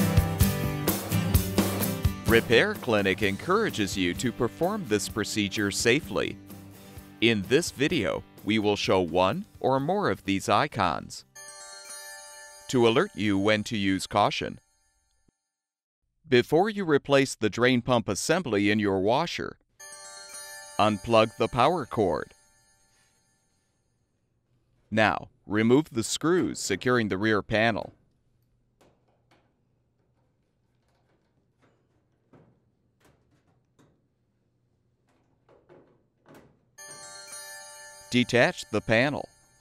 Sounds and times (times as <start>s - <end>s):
Speech: 2.3s - 6.4s, 7.2s - 11.2s, 12.7s - 14.6s, 16.3s - 19.6s, 20.8s - 22.3s, 24.9s - 28.0s, 38.1s - 39.3s.